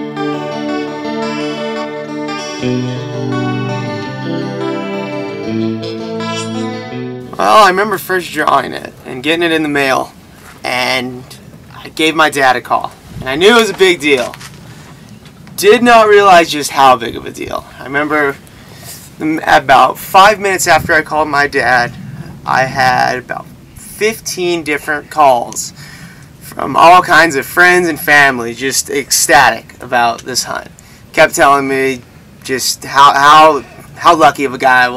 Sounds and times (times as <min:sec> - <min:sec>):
Speech: 0:07.4 - 0:14.4, 0:15.6 - 0:18.4, 0:19.2 - 0:25.8, 0:26.4 - 0:34.9.